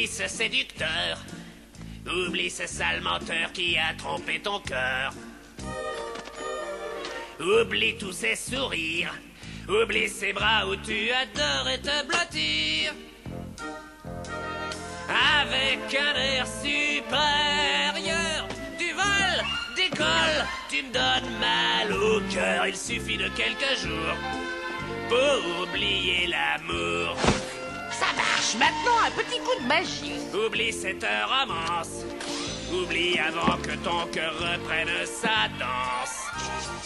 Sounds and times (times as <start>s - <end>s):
Music: 0.0s - 36.8s
Speech: 28.0s - 30.2s.